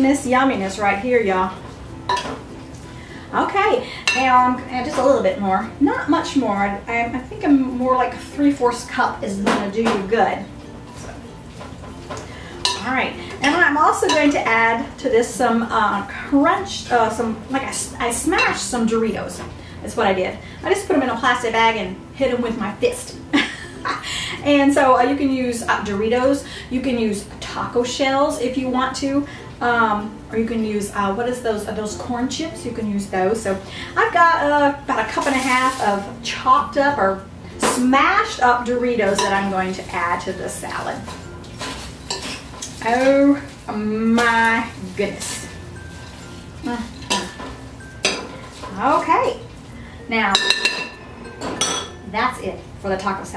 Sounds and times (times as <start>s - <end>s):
Music: 0.0s - 53.3s
Speech: 3.3s - 10.5s, 12.8s - 23.2s, 24.4s - 41.1s, 42.8s - 45.5s, 46.6s - 47.3s, 48.7s - 49.4s, 52.1s - 53.3s.